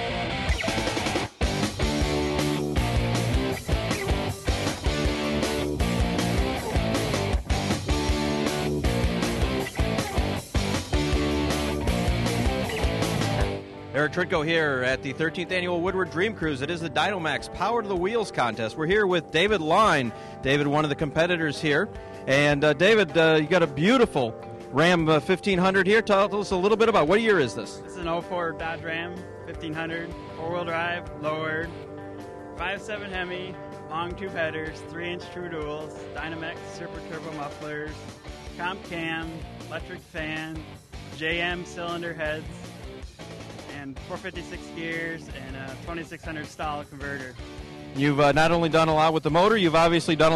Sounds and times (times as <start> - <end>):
Music: 0.0 - 50.3
Speech: 13.9 - 31.7, 32.6 - 38.0, 38.6 - 40.6, 41.2 - 42.6, 43.7 - 47.4, 48.0 - 50.3.